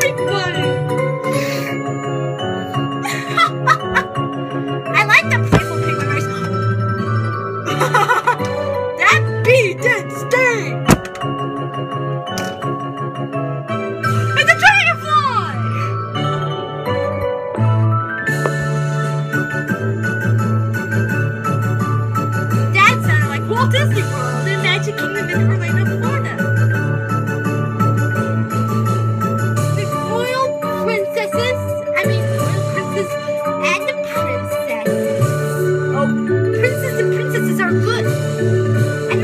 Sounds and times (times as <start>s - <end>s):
Music: 0.0s - 39.2s
Speech: 4.9s - 6.3s, 9.0s - 10.8s, 14.4s - 15.6s, 22.7s - 26.4s, 29.8s - 35.0s, 35.9s - 38.1s.